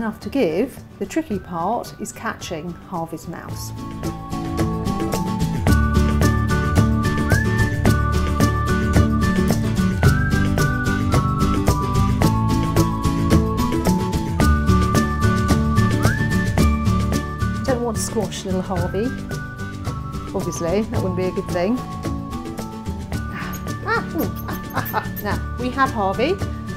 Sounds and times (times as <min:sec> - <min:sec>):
Speech: 0:00.0 - 0:03.7, 0:17.6 - 0:19.2, 0:20.3 - 0:21.8, 0:25.0 - 0:26.4
Music: 0:00.0 - 0:26.7.